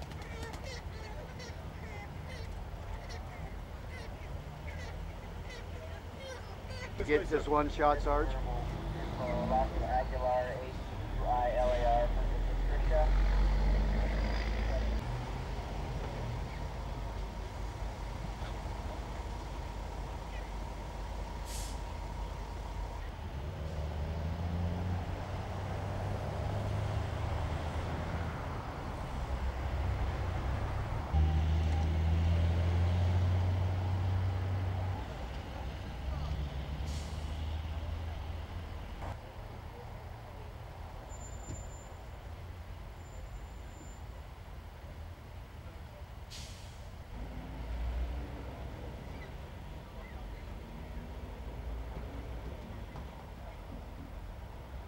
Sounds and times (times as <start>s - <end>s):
Vehicle: 0.0s - 54.8s.